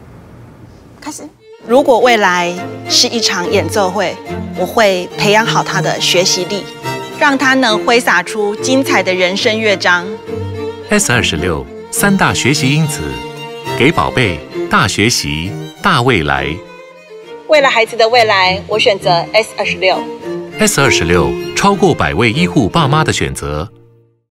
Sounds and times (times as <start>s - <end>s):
Bowed string instrument: 1.4s - 24.1s
Speech: 13.8s - 16.6s, 20.6s - 23.8s.